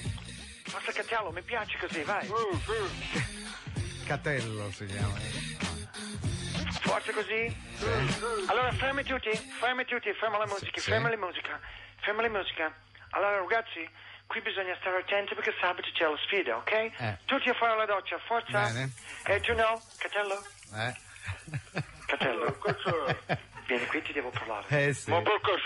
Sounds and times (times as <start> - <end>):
Music: 0.0 - 9.6
Speech: 4.1 - 5.2, 6.8 - 21.0, 22.1 - 25.6.